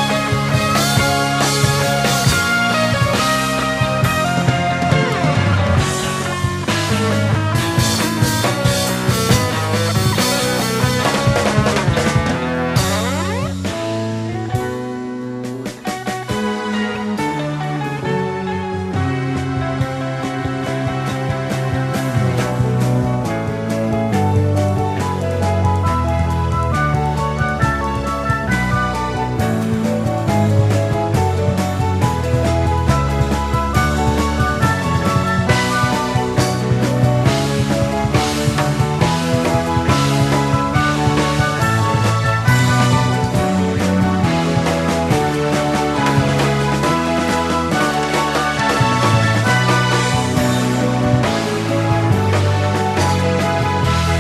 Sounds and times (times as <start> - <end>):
Rock music: 0.0 - 54.2.